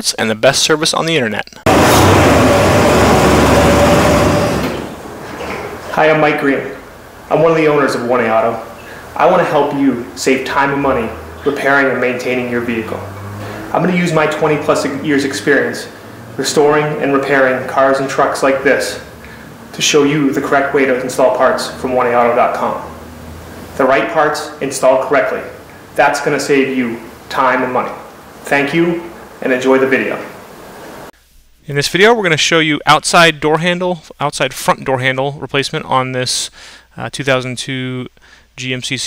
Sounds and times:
Speech: 0.0 - 1.6, 5.9 - 13.0, 13.7 - 19.0, 19.7 - 22.9, 23.8 - 30.3, 31.6 - 39.0.

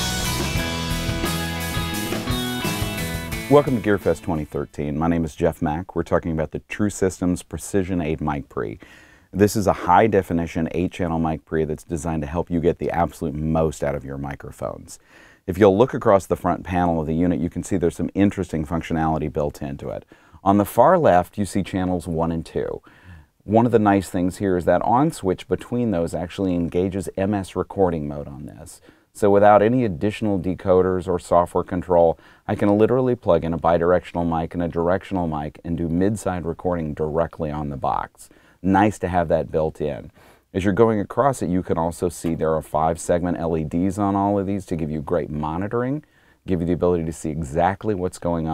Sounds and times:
Speech: 3.5 - 48.5.

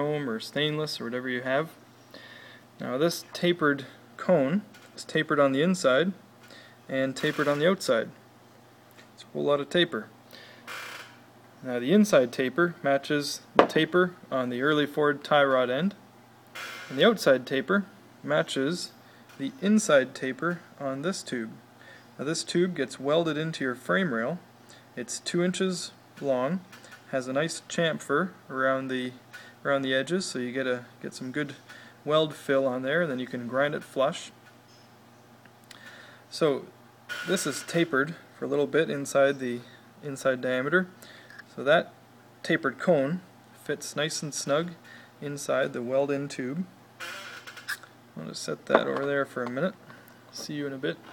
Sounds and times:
Speech: 0.0 - 1.8, 2.8 - 6.2, 6.9 - 8.2, 9.2 - 10.1, 11.6 - 16.0, 16.9 - 21.6, 22.2 - 24.4, 25.0 - 34.4, 36.3 - 36.7, 37.3 - 46.7, 48.2 - 51.1.

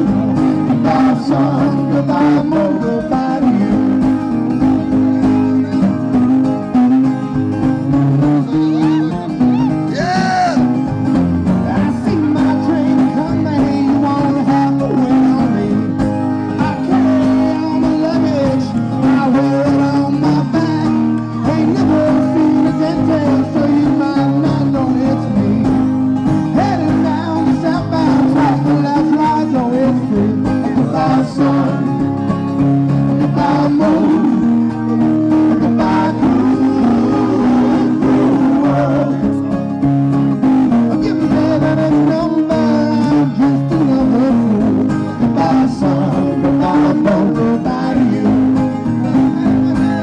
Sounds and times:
Music: 0.0 - 50.0
Singing: 0.7 - 4.1, 11.7 - 25.9, 26.6 - 32.0, 33.1 - 34.6, 35.3 - 39.5, 40.9 - 50.0.

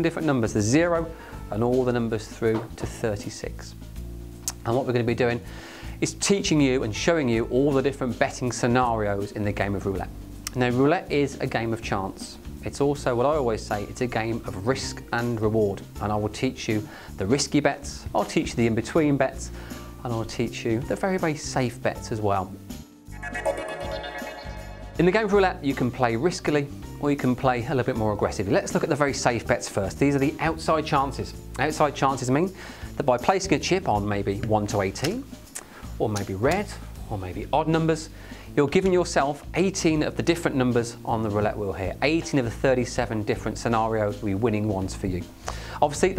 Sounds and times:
Speech: 0.0 - 3.8, 4.6 - 5.4, 6.0 - 22.6, 25.0 - 35.2, 36.0 - 46.1
Music: 0.0 - 46.1.

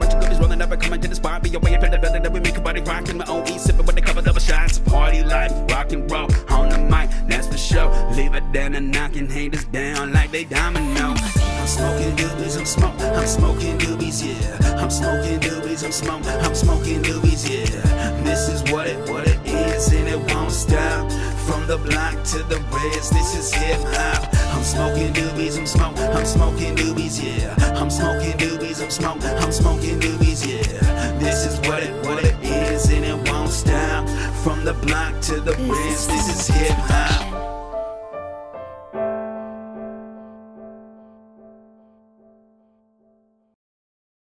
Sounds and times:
Hip hop music: 0.0 - 39.2
Piano: 0.0 - 43.6.

